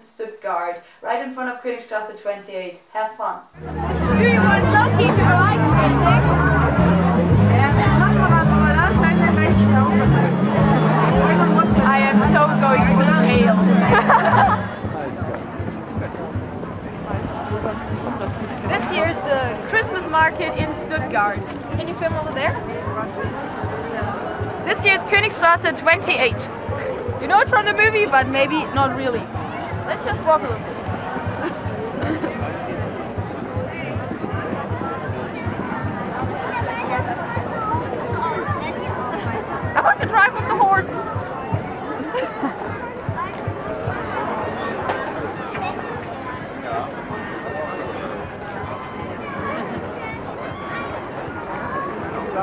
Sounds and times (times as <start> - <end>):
Speech: 0.0 - 30.7, 32.3 - 48.7.